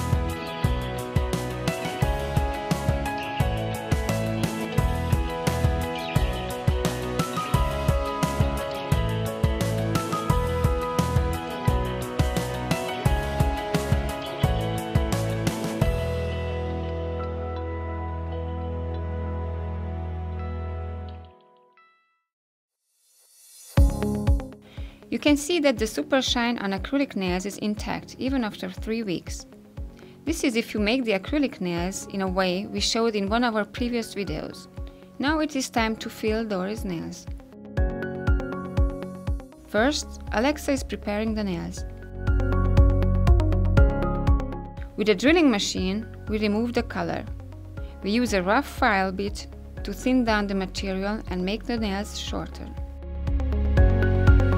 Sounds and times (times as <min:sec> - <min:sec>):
Music: 0:00.0 - 0:54.5
Speech: 0:25.2 - 0:29.4, 0:30.3 - 0:37.3, 0:39.7 - 0:41.8, 0:45.0 - 0:47.3, 0:48.0 - 0:52.8.